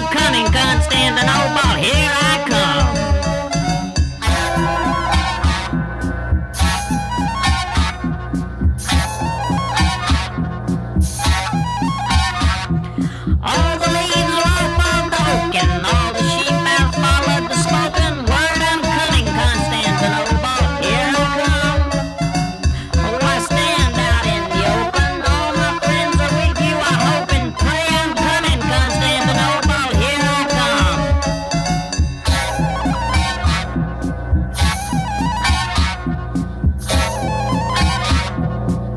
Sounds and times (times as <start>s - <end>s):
Music: 0.0s - 38.9s.